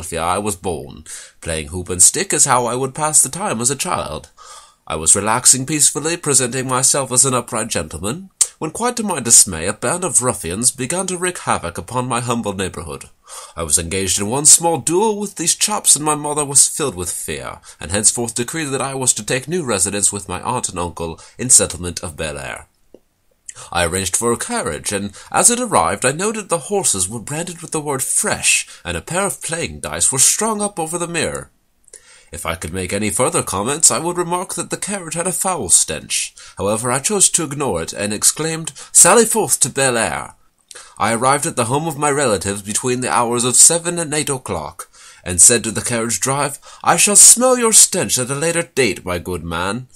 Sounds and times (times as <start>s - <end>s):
Speech: 0.0s - 22.7s, 23.5s - 31.5s, 32.3s - 40.4s, 41.0s - 49.9s.